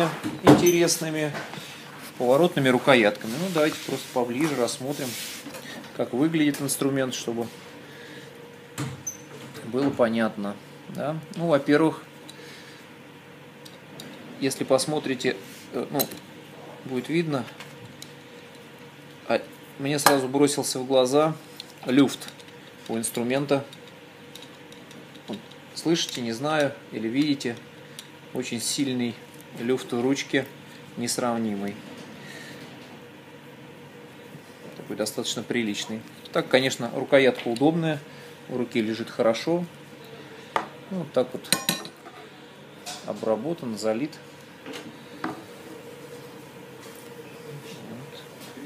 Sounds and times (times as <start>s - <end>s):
Speech: 0.0s - 1.4s, 2.2s - 5.2s, 6.0s - 7.5s, 9.6s - 12.1s, 14.4s - 16.2s, 16.8s - 17.6s, 19.2s - 22.3s, 22.9s - 23.7s, 25.8s - 27.6s, 28.4s - 31.8s, 34.9s - 39.7s, 40.9s - 41.6s, 43.0s - 44.2s, 47.5s - 48.6s.